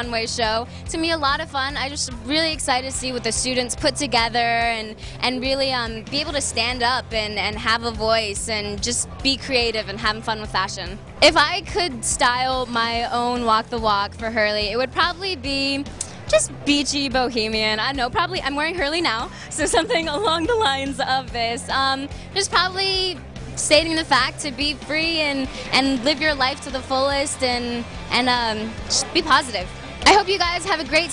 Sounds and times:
Music: 0:00.0 - 0:31.1
Speech: 0:00.0 - 0:31.1.

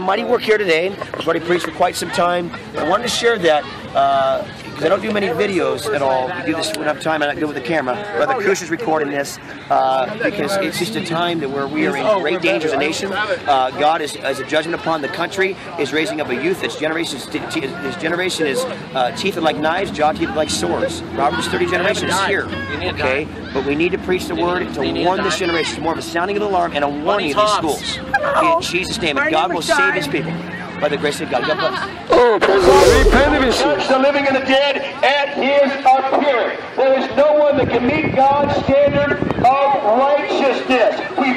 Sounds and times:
Male speech, man speaking: 0:00.0 - 0:30.2, 0:30.8 - 0:41.3
Outside, urban or manmade: 0:00.0 - 0:41.3.

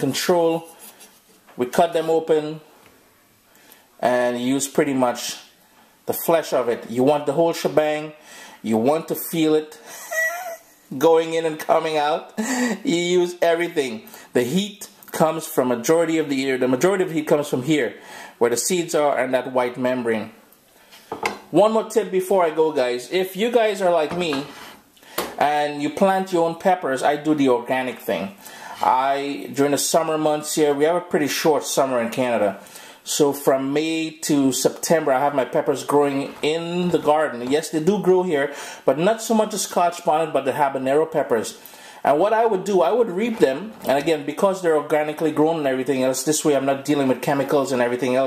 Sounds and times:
Dishes, pots, and pans: 0:21.1 - 0:21.4.

